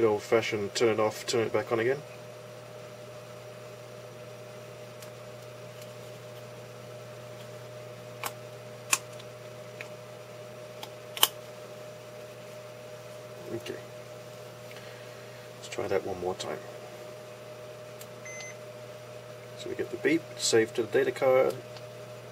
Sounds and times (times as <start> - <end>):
Speech: 0.0 - 2.1, 13.4 - 13.9, 15.6 - 16.7, 19.6 - 21.6.